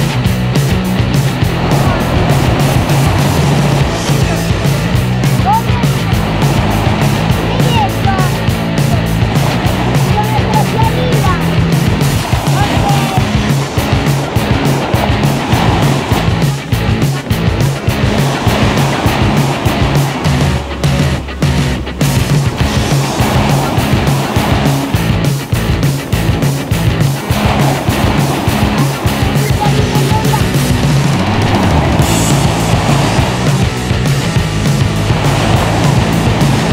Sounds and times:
Motorboat, speedboat: 0.0 - 36.7
Music: 0.0 - 36.7
Speech: 4.1 - 6.2, 7.4 - 9.2, 10.0 - 11.6, 12.3 - 13.4, 29.0 - 30.8.

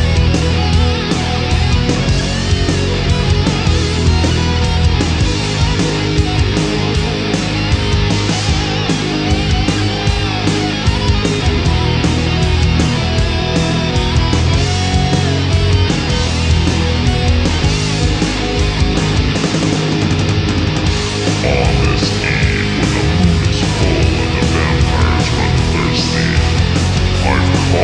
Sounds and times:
Progressive rock: 0.0 - 27.8.

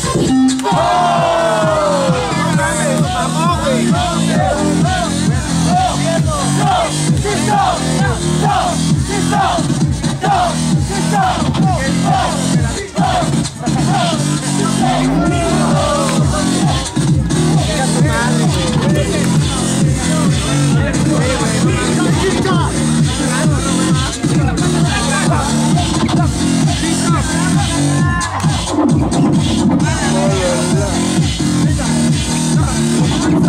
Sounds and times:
Music: 0.0 - 33.4
Speech: 1.9 - 7.4, 11.6 - 28.6, 29.8 - 33.2.

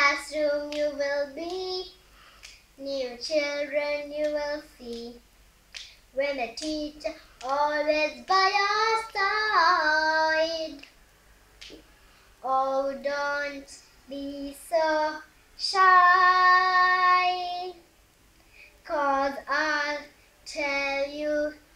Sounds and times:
Child singing: 0.0 - 2.0, 2.8 - 5.2, 6.1 - 10.9, 12.4 - 17.8, 18.8 - 21.7.

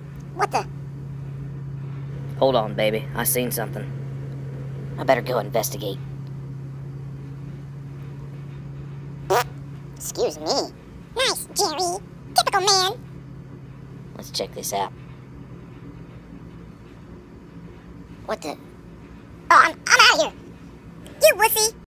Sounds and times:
Speech: 0.4 - 0.7, 2.4 - 3.9, 5.0 - 6.0, 10.0 - 13.0, 14.2 - 15.0, 18.3 - 18.6, 19.5 - 20.4, 21.2 - 21.8.

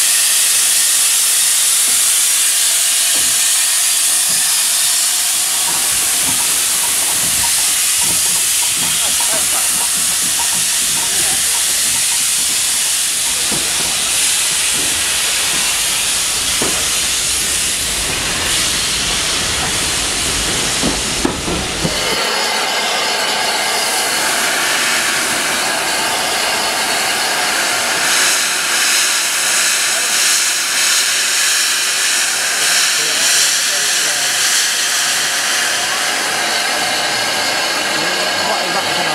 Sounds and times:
Jet engine: 0.0 - 39.1
Speech: 9.0 - 10.0, 32.5 - 36.6, 37.7 - 39.1.

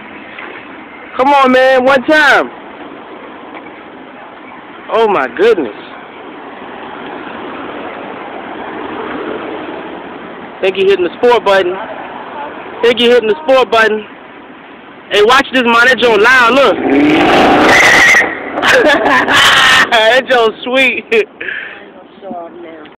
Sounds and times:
Car: 0.0 - 22.9
Accelerating, revving, vroom: 16.7 - 18.8.

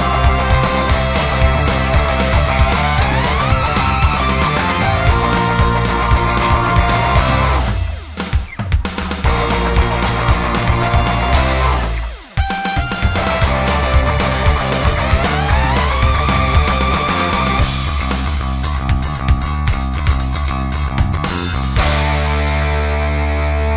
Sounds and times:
Progressive rock: 0.0 - 23.7.

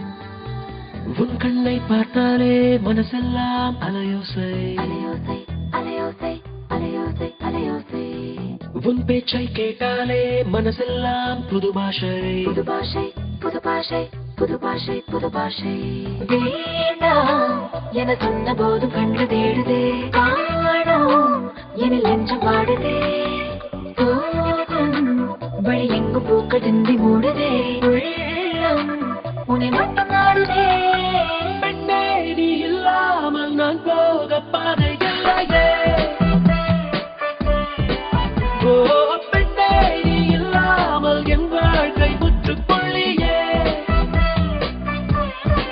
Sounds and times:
Music: 0.0 - 45.7.

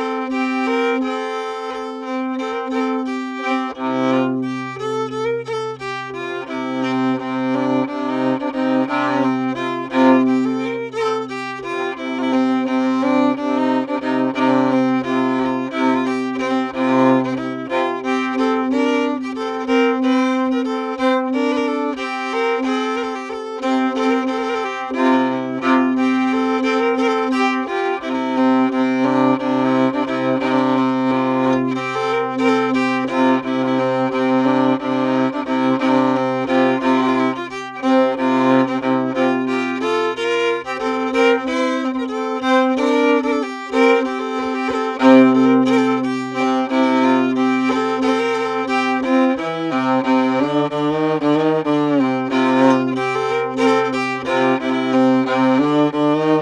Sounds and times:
Violin, fiddle: 0.0 - 56.4.

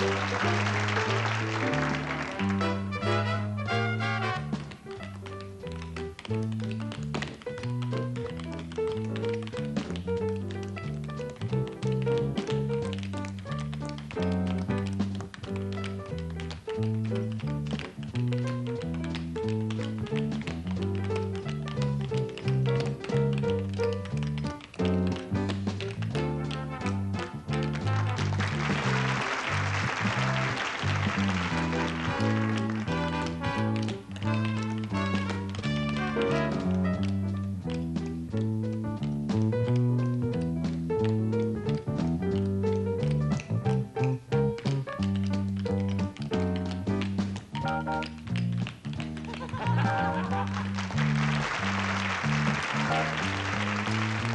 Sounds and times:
Music: 0.0 - 54.3.

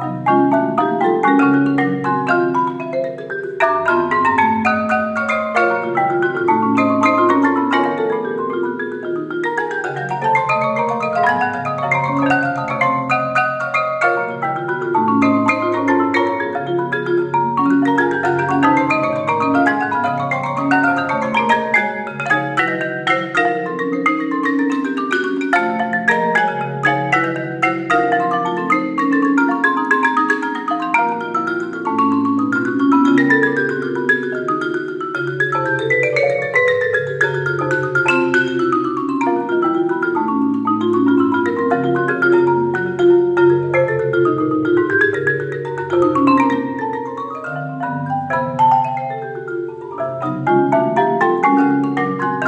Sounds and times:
Percussion: 0.0 - 52.4.

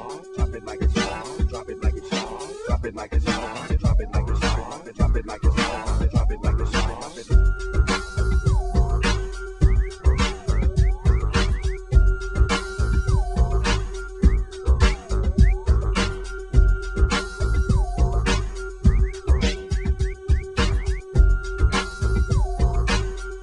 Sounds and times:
Music: 0.0 - 23.4.

